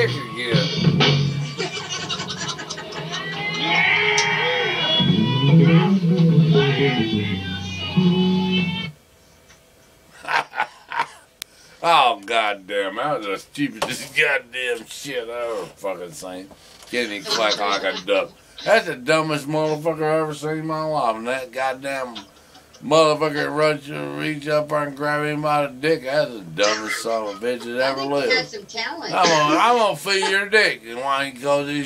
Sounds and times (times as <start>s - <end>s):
Speech: 0.0s - 0.7s, 11.8s - 22.2s, 22.8s - 31.8s
Music: 0.0s - 9.0s.